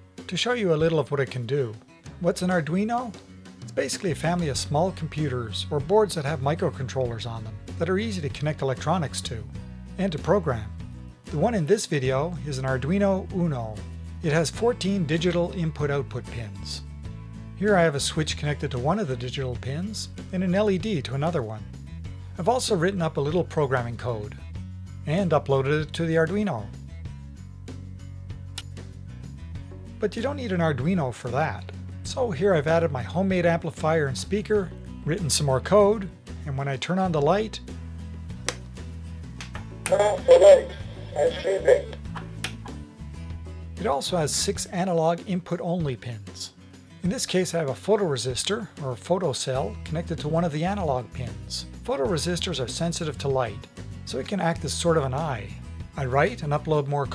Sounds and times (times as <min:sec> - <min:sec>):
Music: 0:00.0 - 0:57.1
Speech: 0:00.3 - 0:16.8, 0:17.6 - 0:21.6, 0:22.4 - 0:24.4, 0:25.1 - 0:26.8, 0:30.0 - 0:37.7, 0:39.9 - 0:42.0, 0:43.8 - 0:57.1.